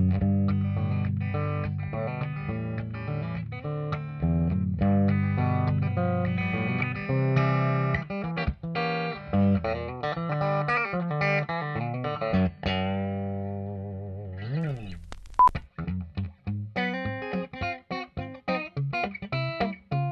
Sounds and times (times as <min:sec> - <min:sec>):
Distortion: 0:00.0 - 0:20.1
Guitar: 0:00.0 - 0:20.1.